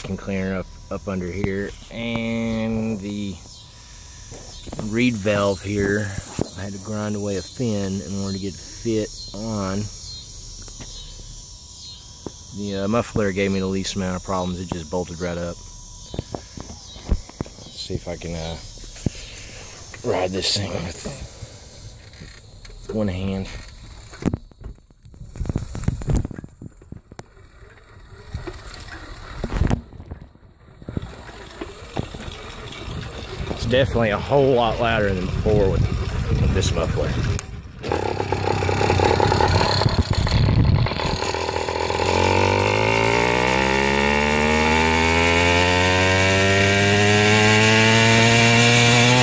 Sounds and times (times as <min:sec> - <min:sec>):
Speech: 0:00.0 - 0:03.4, 0:04.8 - 0:09.9, 0:12.6 - 0:15.6, 0:17.8 - 0:18.6, 0:20.0 - 0:21.2, 0:22.9 - 0:23.6, 0:33.6 - 0:37.2
Bicycle: 0:21.1 - 0:49.2.